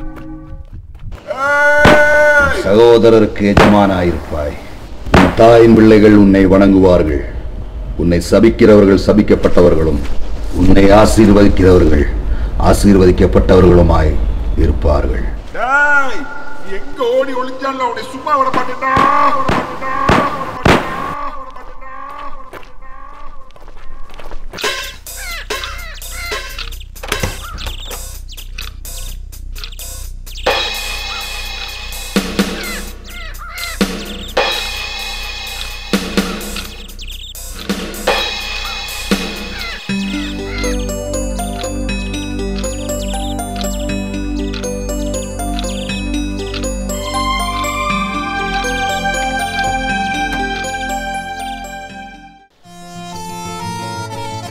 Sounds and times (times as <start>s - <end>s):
Speech: 2.4s - 4.6s, 5.3s - 7.4s, 8.0s - 20.5s.